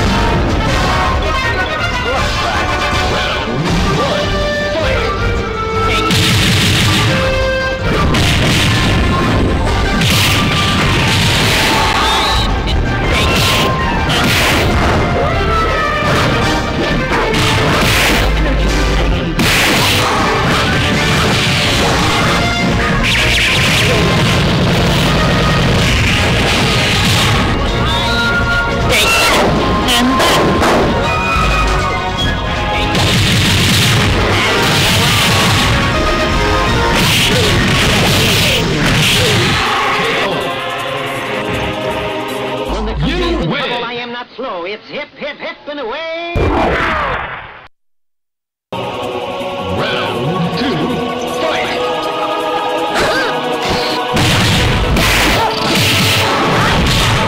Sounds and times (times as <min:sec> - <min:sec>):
Music: 0:00.0 - 0:43.7, 0:48.7 - 0:57.2.